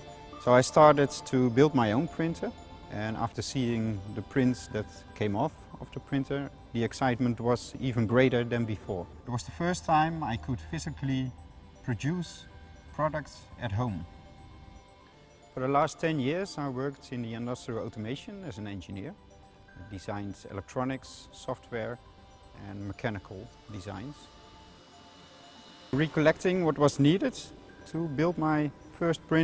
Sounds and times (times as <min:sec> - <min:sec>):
Music: 0:00.0 - 0:29.4
Speech: 0:00.4 - 0:14.1, 0:15.6 - 0:19.2, 0:19.8 - 0:22.0, 0:22.6 - 0:24.3, 0:26.0 - 0:29.4.